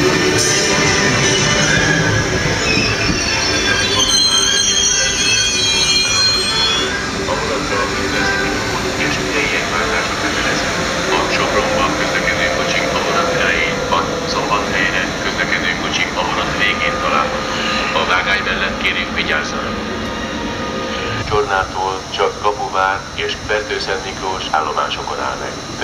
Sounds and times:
Speech: 3.3 - 4.6, 7.2 - 19.8, 21.2 - 25.8.

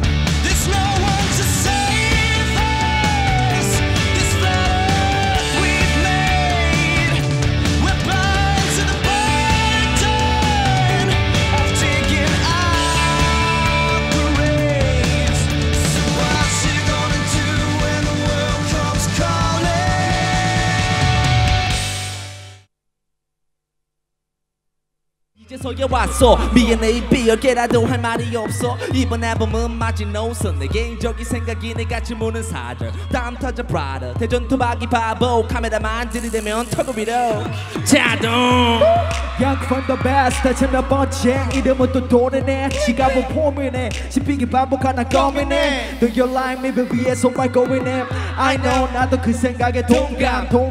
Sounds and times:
Music: 0.0 - 22.7, 25.4 - 50.7.

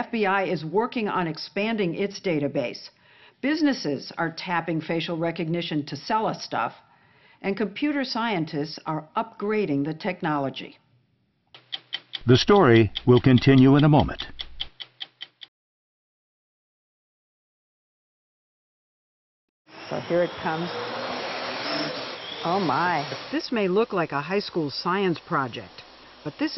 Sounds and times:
Speech: 0.0 - 6.8, 7.4 - 10.8, 12.2 - 14.3, 19.9 - 20.7, 22.5 - 26.5.

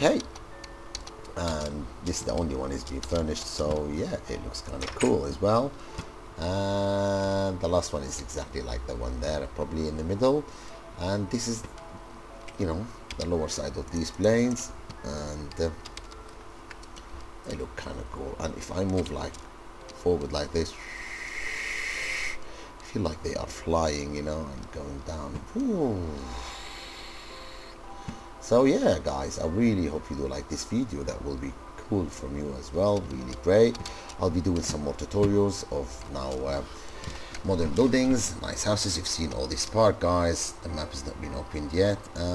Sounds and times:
Music: 0.0 - 42.3
Speech: 1.4 - 5.7, 20.0 - 20.8, 28.5 - 36.7, 37.5 - 42.3.

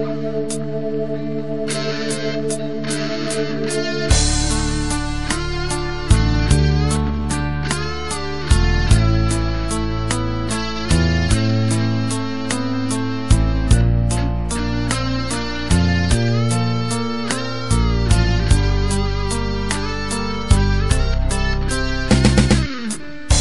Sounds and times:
Strum: 0.0 - 23.4.

